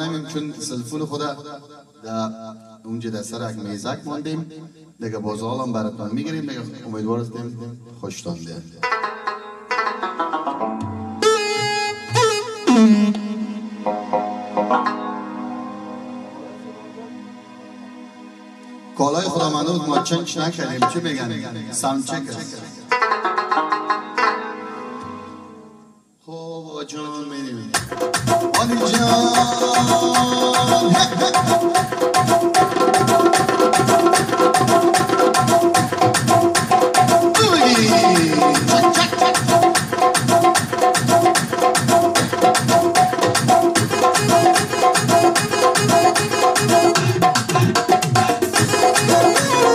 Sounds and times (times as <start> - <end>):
Speech: 0.0 - 8.7, 19.0 - 22.8, 26.2 - 27.8, 37.4 - 39.2
Music: 8.8 - 26.2, 27.7 - 49.7.